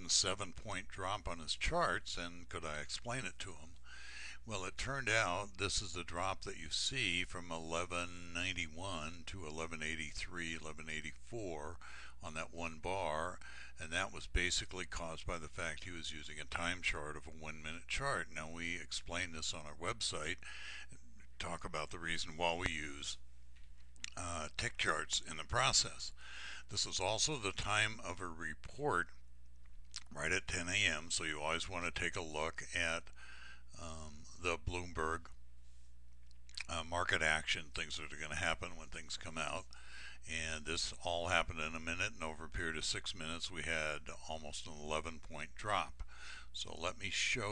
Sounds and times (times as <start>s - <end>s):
Speech: 0.0s - 3.8s, 4.4s - 23.2s, 24.0s - 29.2s, 30.0s - 35.4s, 36.6s - 47.5s.